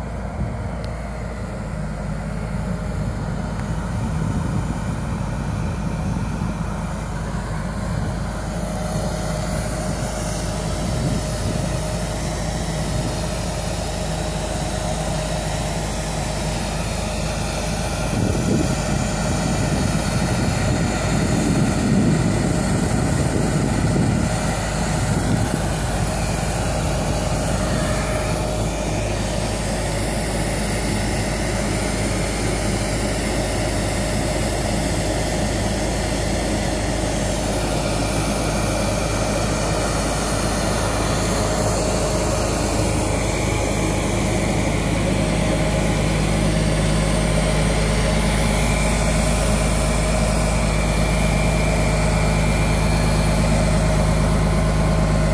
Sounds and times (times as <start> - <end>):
Outside, urban or manmade: 0.0 - 55.3
Vehicle: 0.0 - 55.3.